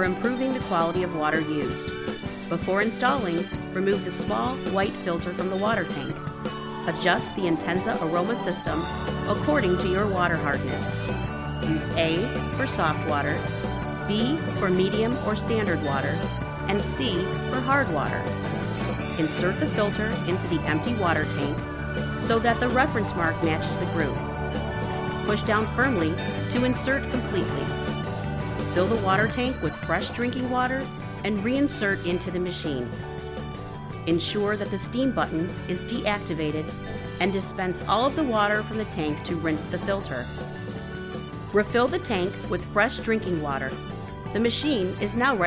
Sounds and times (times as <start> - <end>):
Speech: 0.0 - 1.8, 2.5 - 6.2, 6.9 - 10.9, 11.7 - 13.4, 14.1 - 18.2, 19.2 - 21.6, 22.2 - 24.2, 25.3 - 27.8, 28.8 - 32.9, 34.1 - 40.3, 41.6 - 43.8, 44.4 - 45.4
Music: 0.0 - 45.4.